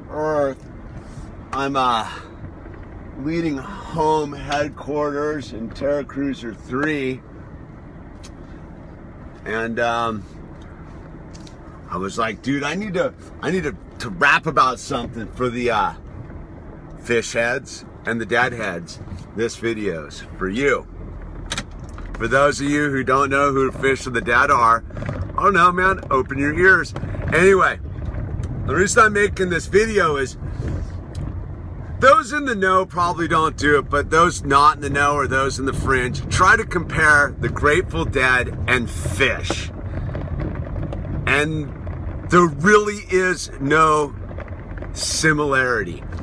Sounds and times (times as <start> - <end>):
Car: 0.0 - 46.2
Speech: 0.1 - 0.6, 1.5 - 2.2, 9.4 - 10.2, 11.9 - 16.0, 17.0 - 20.8, 22.2 - 24.8, 25.4 - 27.8, 28.7 - 30.4, 32.0 - 39.7, 41.3 - 41.7, 42.3 - 44.1, 45.0 - 46.0.